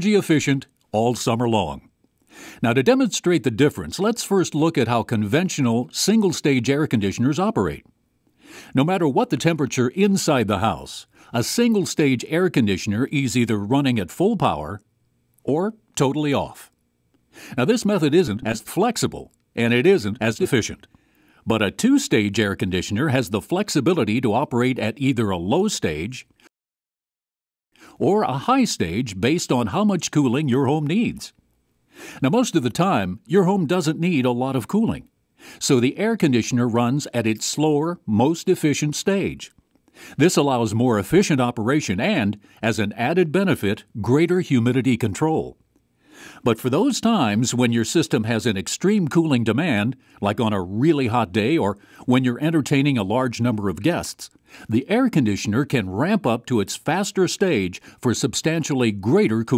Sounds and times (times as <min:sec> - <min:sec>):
Speech: 0:00.0 - 0:01.9, 0:02.6 - 0:07.9, 0:08.7 - 0:16.8, 0:17.6 - 0:20.9, 0:21.5 - 0:26.4, 0:28.0 - 0:31.4, 0:32.2 - 0:39.6, 0:40.2 - 0:45.6, 0:46.4 - 0:59.5.